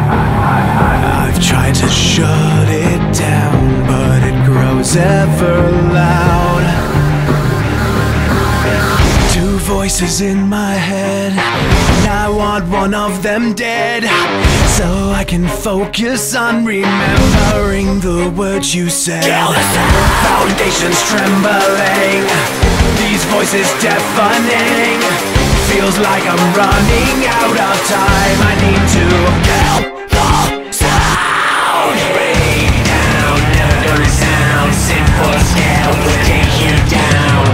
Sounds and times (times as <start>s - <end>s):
Music: 0.0s - 37.5s.